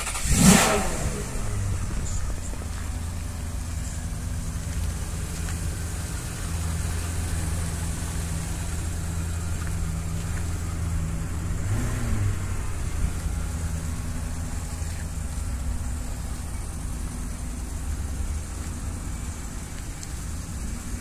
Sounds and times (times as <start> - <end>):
Car: 0.0 - 21.0
Outside, urban or manmade: 0.0 - 21.0.